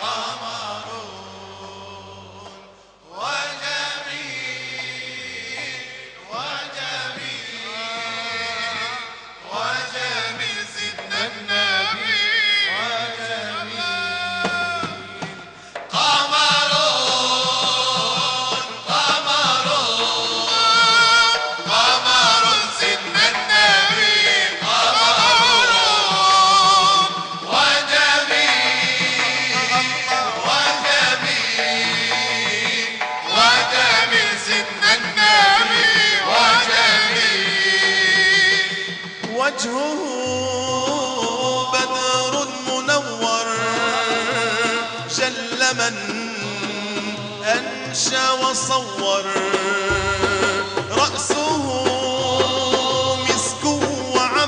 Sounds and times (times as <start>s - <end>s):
Music: 0.0s - 54.4s.